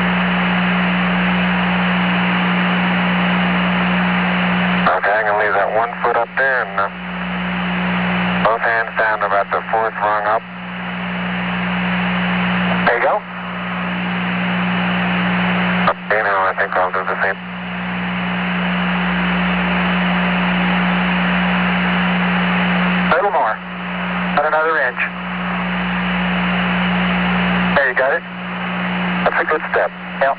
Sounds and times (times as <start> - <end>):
Speech: 4.8 - 7.0, 8.4 - 10.5, 12.8 - 13.3, 15.9 - 17.4, 23.1 - 23.6, 24.4 - 25.2, 27.7 - 28.3, 29.2 - 30.3.